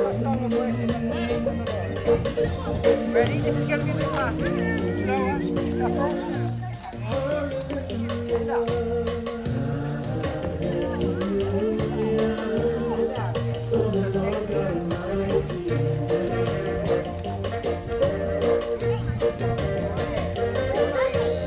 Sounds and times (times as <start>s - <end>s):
Speech: 0.0s - 8.9s, 10.6s - 15.7s, 18.8s - 21.4s
Happy music: 0.0s - 21.4s
Soul music: 0.0s - 21.4s.